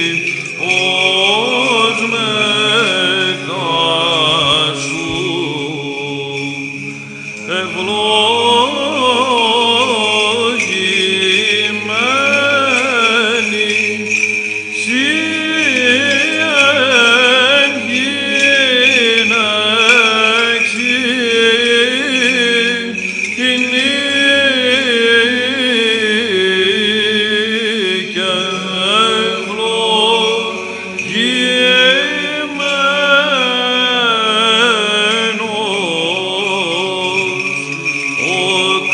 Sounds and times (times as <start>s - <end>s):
Vocal music: 0.0s - 38.9s.